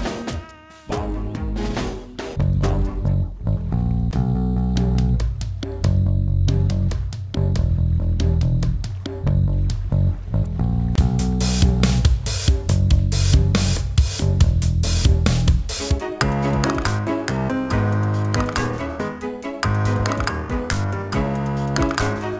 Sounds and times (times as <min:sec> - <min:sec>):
Music: 0:00.0 - 0:22.4.